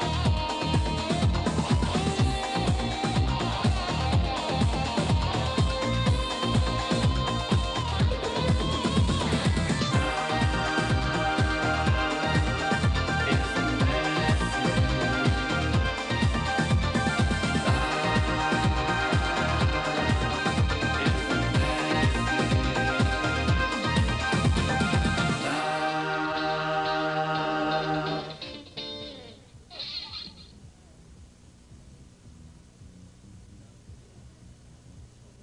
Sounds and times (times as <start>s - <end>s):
Music: 0.0s - 35.4s.